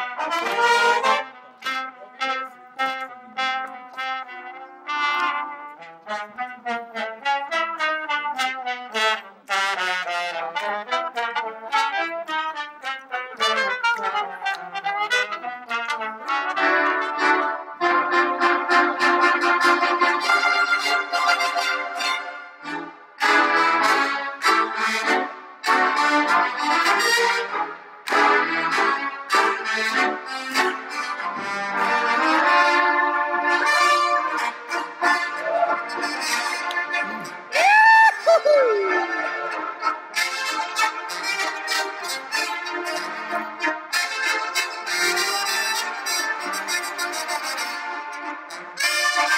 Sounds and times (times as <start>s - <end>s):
Trombone: 0.0s - 37.6s, 38.7s - 49.3s
Trumpet: 0.0s - 49.3s.